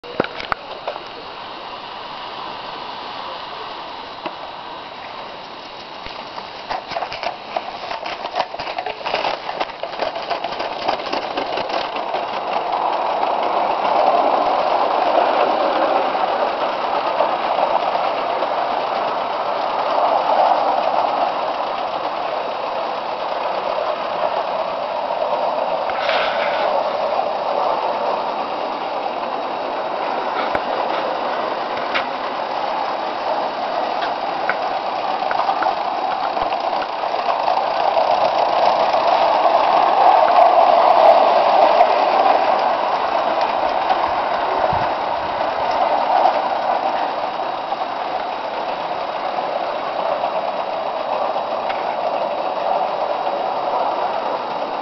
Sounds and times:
Train: 0.0s - 54.8s.

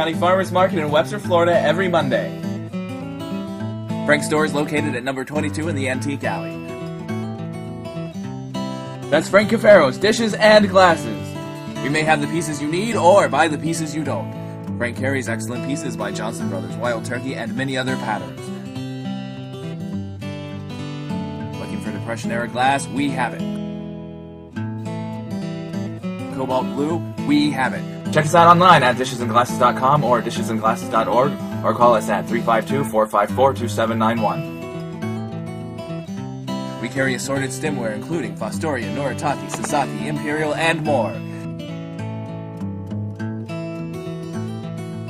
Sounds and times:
Speech: 0.0s - 2.4s, 4.0s - 6.5s, 9.1s - 18.6s, 21.6s - 23.5s, 26.3s - 34.5s, 36.8s - 41.4s
Music: 0.0s - 45.0s.

